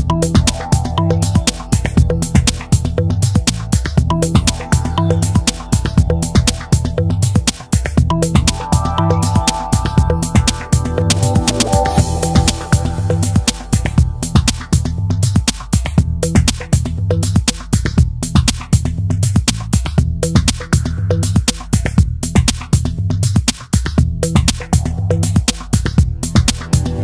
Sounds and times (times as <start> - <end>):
Music: 0.0 - 27.0.